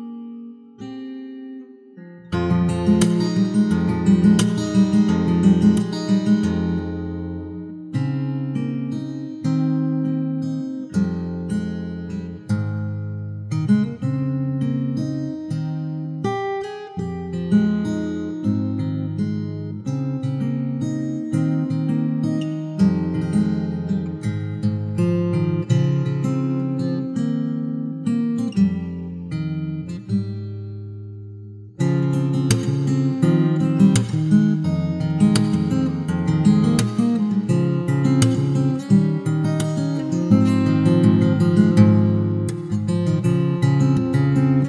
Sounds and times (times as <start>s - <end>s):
Acoustic guitar: 0.0s - 44.6s
Strum: 2.0s - 8.6s, 29.8s - 44.6s.